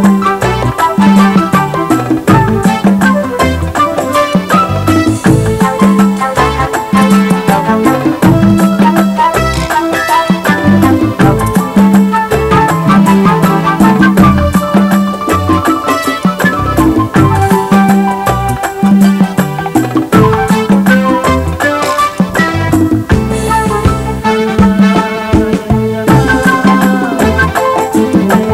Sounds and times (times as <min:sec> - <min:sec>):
Middle Eastern music: 0:00.0 - 0:28.5.